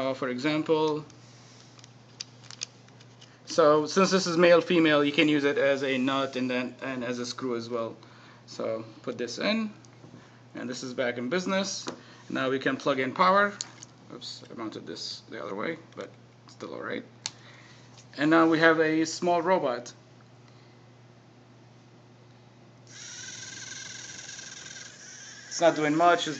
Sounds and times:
Speech: 0.0 - 1.1, 3.5 - 9.8, 10.6 - 17.1, 18.2 - 20.0, 25.5 - 26.3.

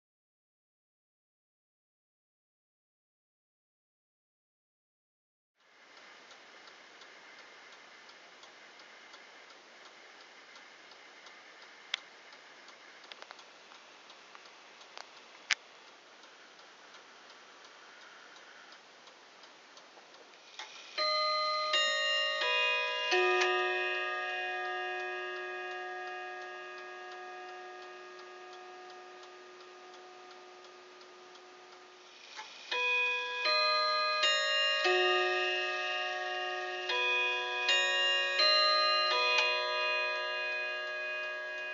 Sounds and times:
Tick-tock: 5.6 - 41.7.

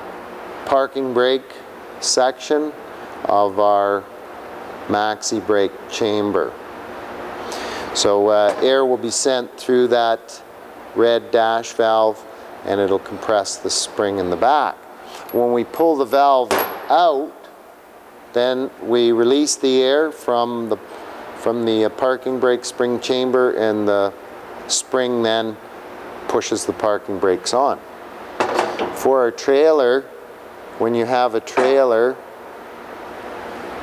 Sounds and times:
Speech: 0.7 - 4.1, 4.9 - 6.6, 8.0 - 17.5, 18.3 - 20.8, 21.4 - 25.6, 26.3 - 27.8, 29.0 - 30.1, 30.8 - 32.2.

